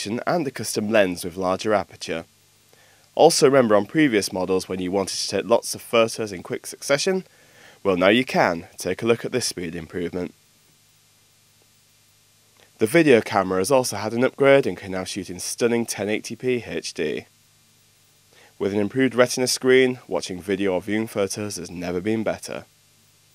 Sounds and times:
Speech: 0.0 - 2.3, 3.2 - 10.3, 12.8 - 17.3, 18.6 - 22.7.

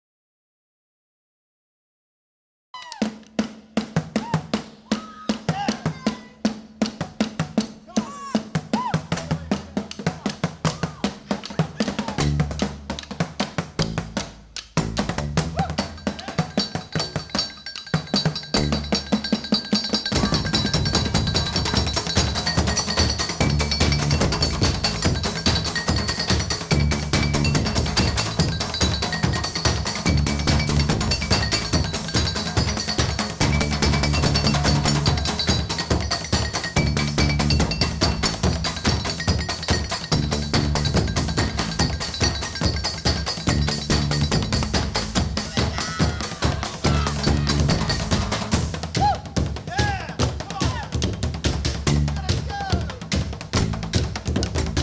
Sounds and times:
Music: 2.8 - 54.8.

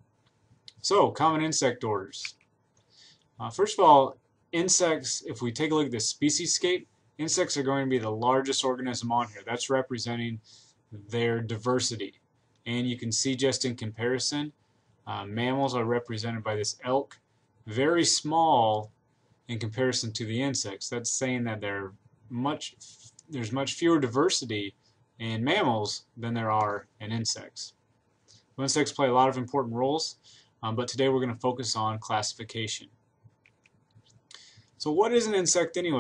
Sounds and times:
Speech: 0.7 - 2.4, 3.4 - 27.8, 28.6 - 33.0, 34.8 - 36.0.

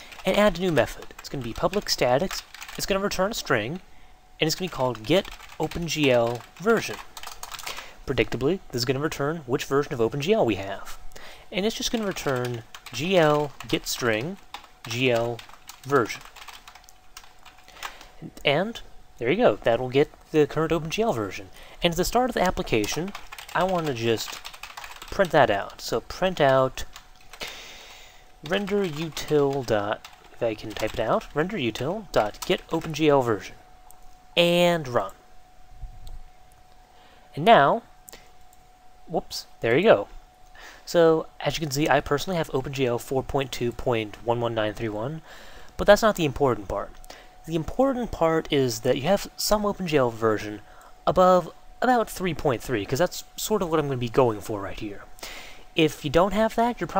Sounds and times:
Speech: 0.2 - 3.8, 4.4 - 7.1, 8.1 - 16.2, 18.2 - 24.4, 25.1 - 26.9, 28.4 - 33.6, 34.4 - 35.2, 37.4 - 37.9, 39.1 - 40.1, 40.9 - 45.2, 45.8 - 55.1, 55.8 - 57.0.

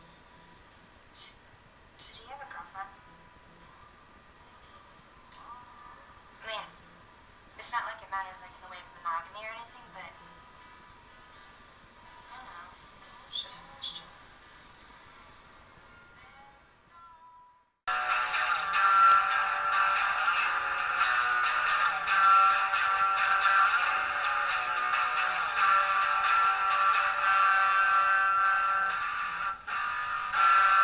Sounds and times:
Speech: 1.2 - 1.4, 2.0 - 3.7, 4.4 - 6.9, 7.6 - 10.4, 12.3 - 14.2
Music: 2.8 - 6.8, 7.8 - 30.8.

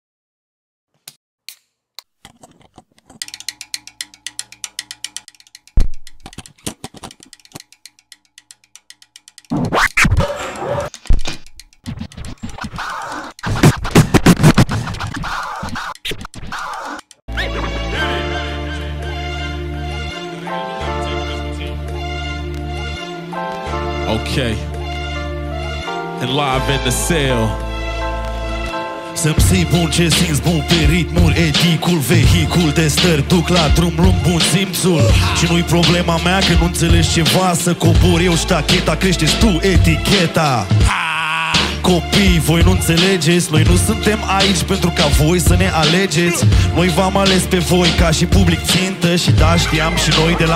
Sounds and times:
Music: 3.3 - 5.6, 11.9 - 50.5.

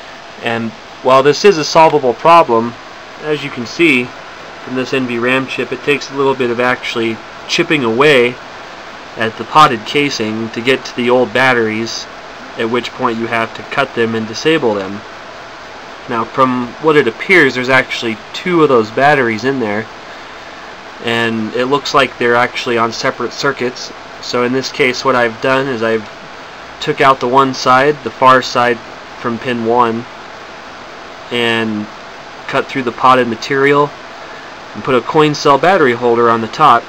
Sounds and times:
Speech: 0.4 - 8.4, 9.2 - 15.0, 16.0 - 19.9, 21.0 - 26.1, 26.8 - 30.1, 31.3 - 34.0, 34.7 - 36.8.

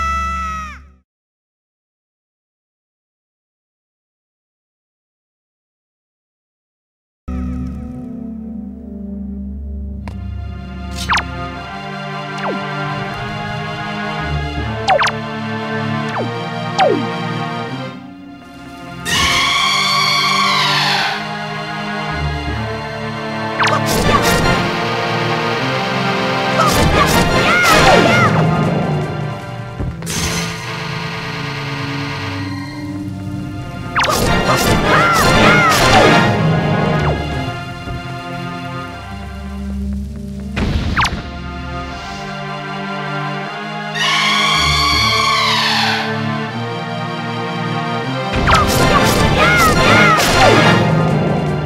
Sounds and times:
Music: 7.3 - 51.6.

